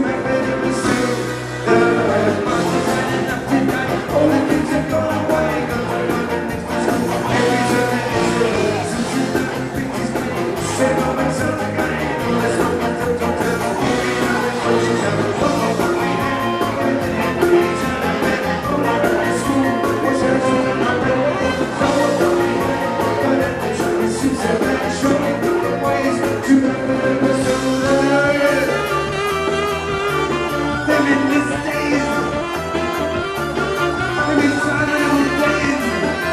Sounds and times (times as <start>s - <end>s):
Music: 0.0s - 36.3s.